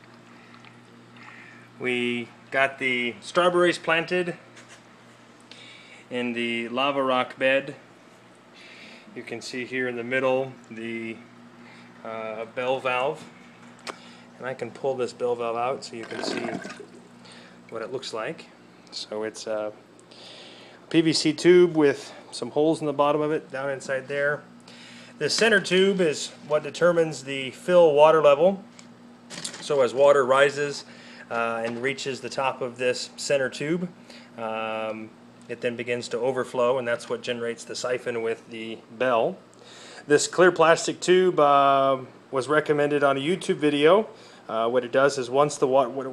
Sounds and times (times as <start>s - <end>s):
Speech: 1.8s - 4.4s, 6.1s - 7.8s, 9.2s - 11.2s, 12.0s - 13.3s, 14.4s - 16.6s, 17.7s - 19.8s, 20.9s - 24.5s, 25.2s - 28.7s, 29.6s - 39.4s, 40.0s - 46.1s.